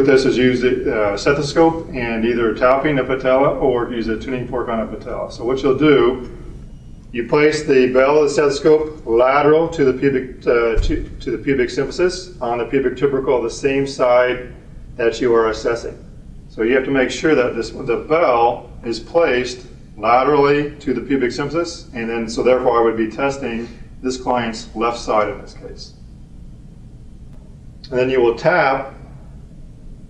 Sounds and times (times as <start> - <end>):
Speech: 0.0 - 6.3, 7.2 - 16.0, 16.6 - 26.0, 27.9 - 29.0.